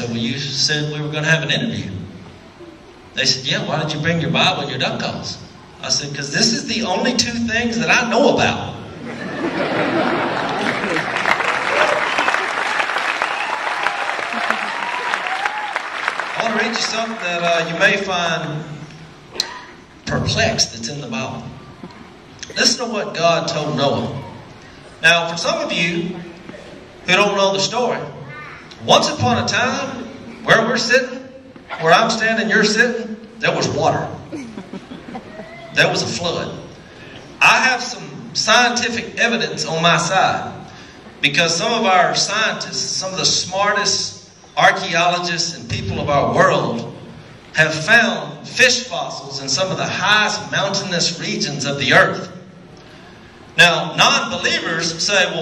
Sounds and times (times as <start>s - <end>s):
Speech: 0.0s - 2.0s, 3.2s - 8.8s, 16.4s - 18.8s, 20.1s - 21.5s, 22.4s - 24.4s, 25.0s - 34.2s, 35.7s - 36.7s, 37.4s - 47.0s, 47.6s - 52.4s, 53.6s - 55.4s.